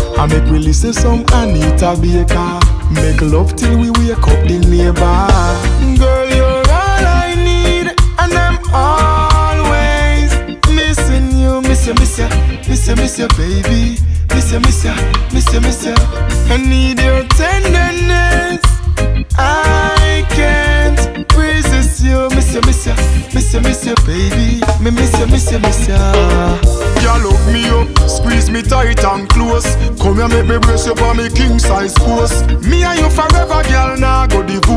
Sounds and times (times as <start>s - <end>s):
Music: 0.0s - 34.7s.